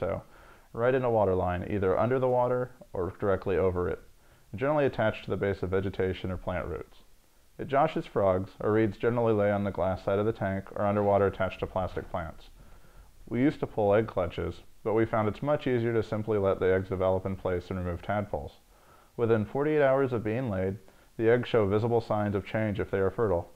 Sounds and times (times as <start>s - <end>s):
Speech: 0.0s - 12.6s, 13.3s - 18.6s, 19.2s - 23.5s.